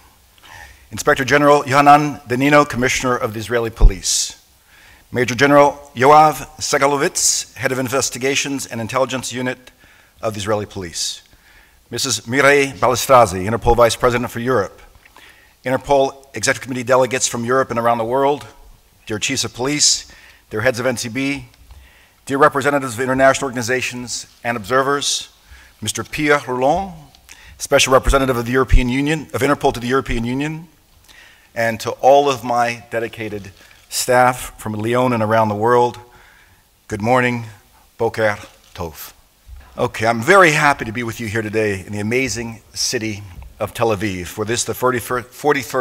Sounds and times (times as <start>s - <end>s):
Narration, monologue: 0.0s - 45.8s
Male speech, man speaking: 1.0s - 4.4s, 5.2s - 11.2s, 11.9s - 14.8s, 15.7s - 21.5s, 22.3s - 30.7s, 31.6s - 36.1s, 36.9s - 39.2s, 39.8s - 45.8s.